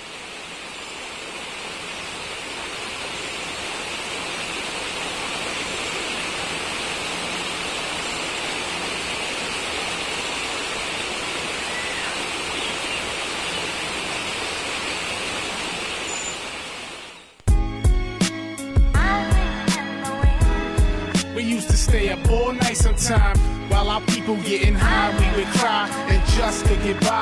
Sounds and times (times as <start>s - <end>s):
Outside, rural or natural: 0.0s - 27.2s.